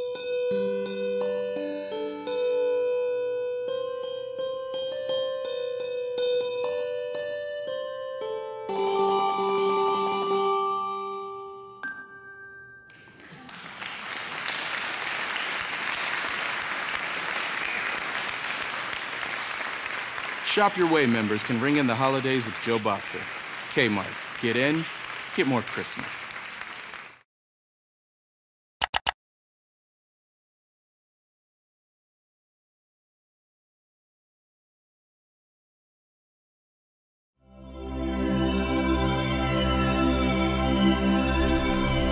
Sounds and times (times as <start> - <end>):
Music: 0.0 - 13.3, 37.4 - 42.1.